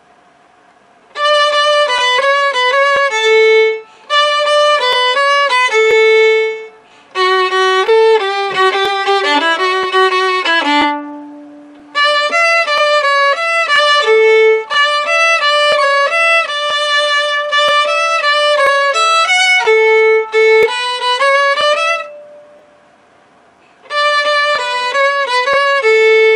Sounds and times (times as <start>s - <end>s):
Violin, fiddle: 1.1s - 22.6s, 23.7s - 26.3s.